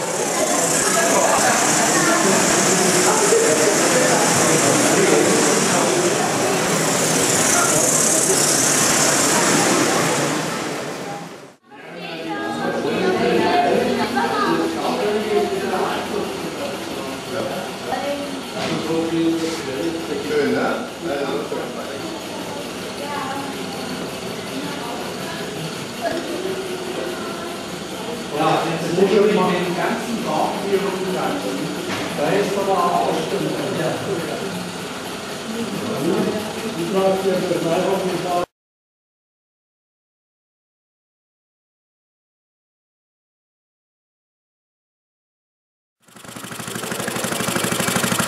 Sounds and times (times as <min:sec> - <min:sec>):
Speech: 0:11.7 - 0:34.6.